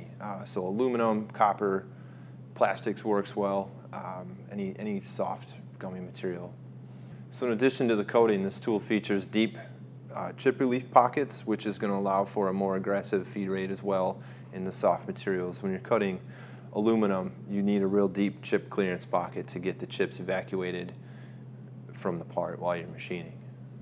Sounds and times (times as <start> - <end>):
Speech: 0.0 - 1.9, 2.6 - 6.6, 7.3 - 21.0, 21.9 - 23.5.